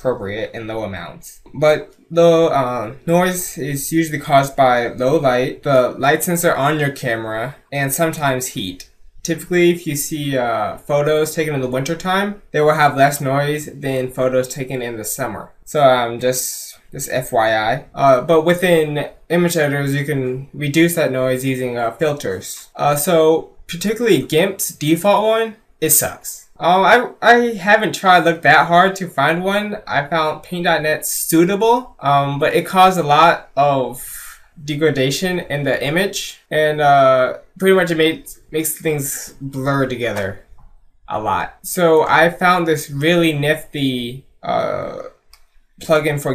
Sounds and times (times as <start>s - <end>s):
Speech: 0.0s - 40.5s, 41.1s - 45.2s, 45.8s - 46.3s.